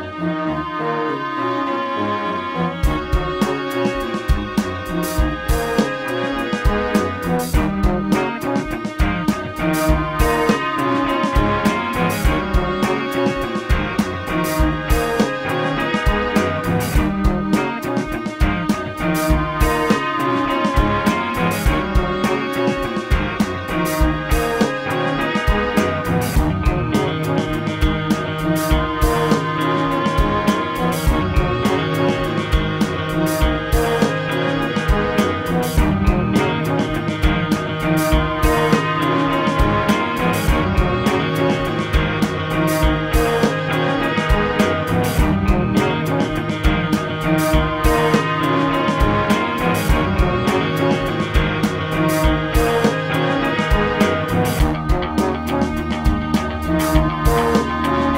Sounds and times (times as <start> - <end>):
Music: 0.0 - 58.1.